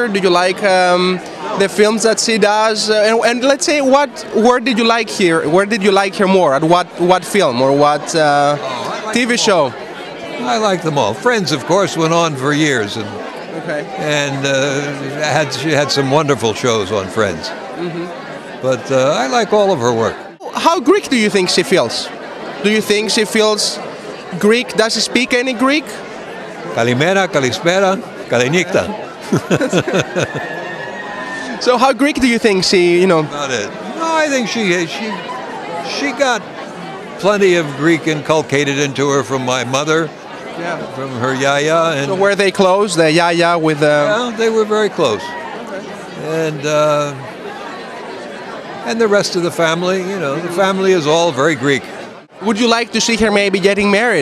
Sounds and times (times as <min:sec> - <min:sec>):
Speech: 0:00.0 - 0:09.8, 0:10.4 - 0:26.0, 0:26.8 - 0:29.0, 0:48.8 - 0:54.2
Chatter: 0:00.0 - 0:54.2.